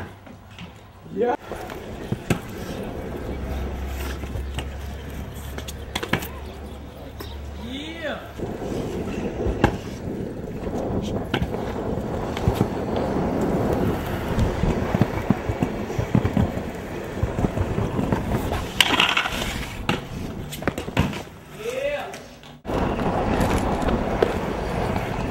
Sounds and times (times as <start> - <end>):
Outside, urban or manmade: 0.0 - 25.3.